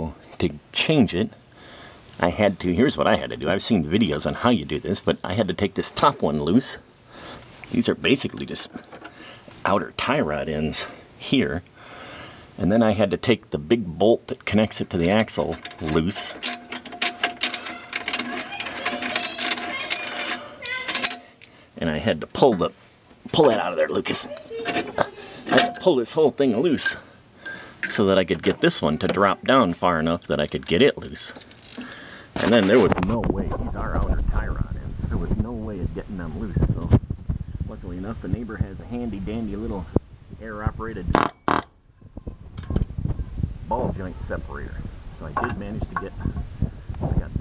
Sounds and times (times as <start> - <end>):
Speech: 0.0 - 1.4, 2.2 - 6.8, 7.7 - 8.8, 9.6 - 11.6, 12.6 - 16.4, 21.8 - 27.0, 27.9 - 31.4, 32.4 - 37.0, 37.7 - 41.2, 43.7 - 46.3, 47.0 - 47.4.